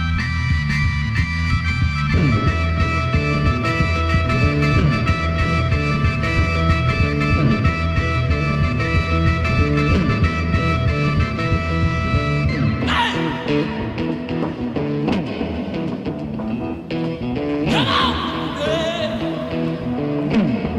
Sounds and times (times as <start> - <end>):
Psychedelic rock: 0.0 - 20.7.